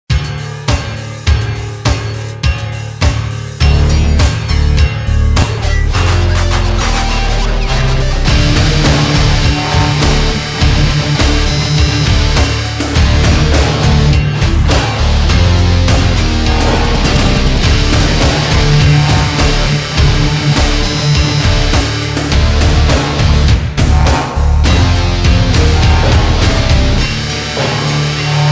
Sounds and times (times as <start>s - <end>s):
Angry music: 0.1s - 28.5s.